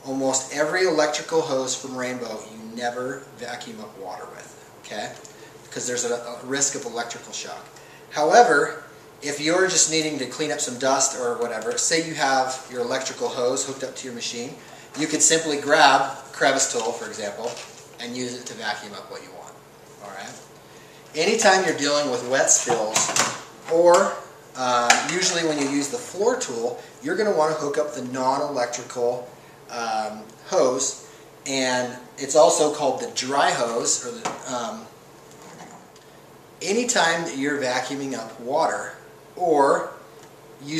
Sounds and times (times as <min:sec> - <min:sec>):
Speech: 0:00.0 - 0:20.5, 0:21.1 - 0:35.0, 0:36.6 - 0:40.0.